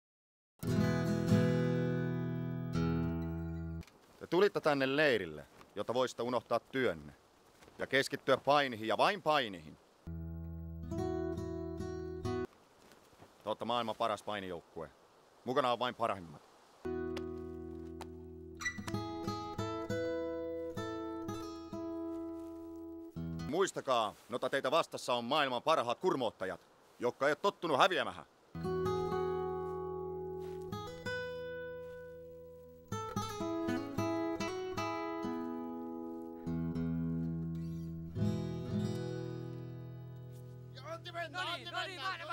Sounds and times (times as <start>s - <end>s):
Music: 0.6s - 3.8s, 10.1s - 12.5s, 16.9s - 23.5s, 28.6s - 41.8s.